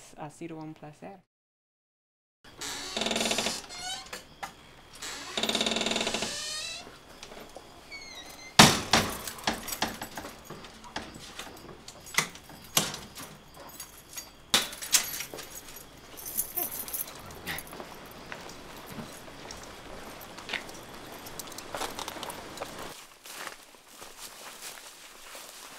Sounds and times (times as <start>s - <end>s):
Door: 8.2s - 13.3s.